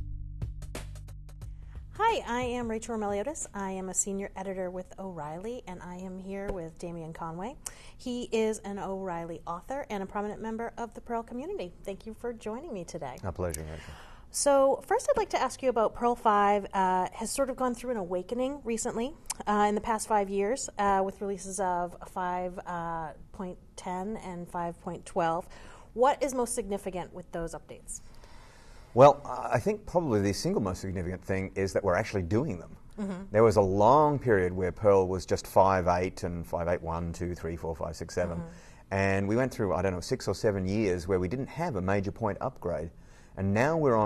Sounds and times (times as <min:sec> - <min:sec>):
Speech: 0:13.2 - 0:13.8, 0:29.0 - 0:33.8, 0:34.6 - 0:42.6.